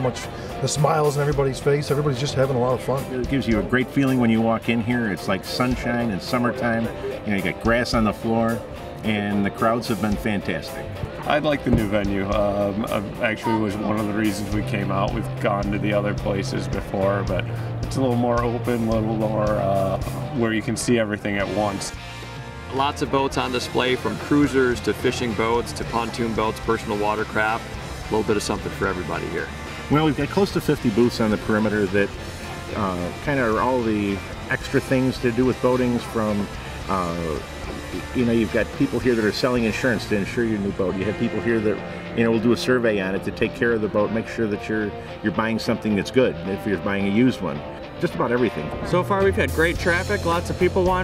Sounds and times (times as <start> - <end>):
Speech: 0.0 - 22.0, 22.7 - 51.0
Music: 0.0 - 51.0.